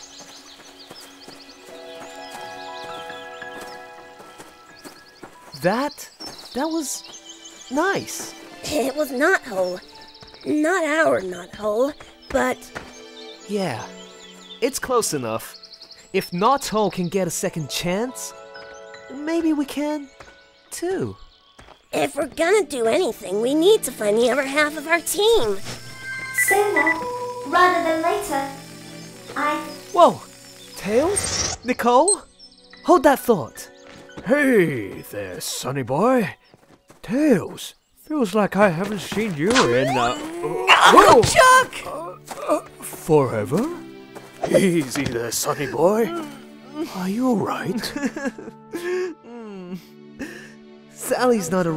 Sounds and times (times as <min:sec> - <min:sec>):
Music: 0:00.0 - 0:51.7.